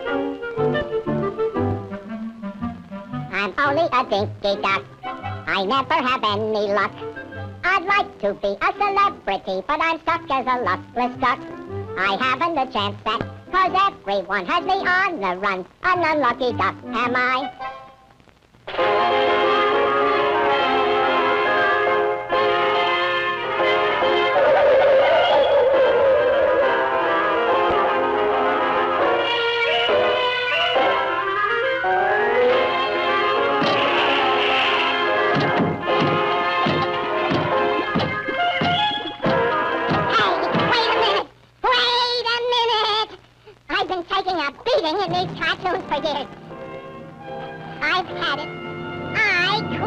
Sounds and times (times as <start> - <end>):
Music: 0.0 - 49.8.